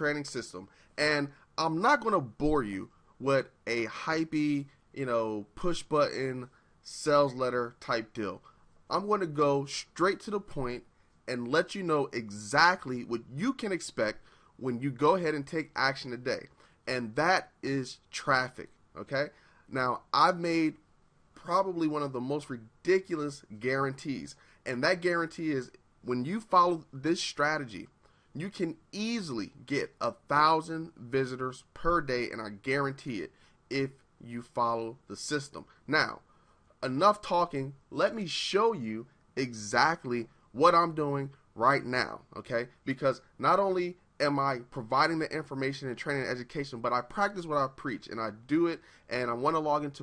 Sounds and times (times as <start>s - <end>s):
Speech: 0.0s - 20.8s, 21.4s - 36.2s, 36.8s - 50.0s.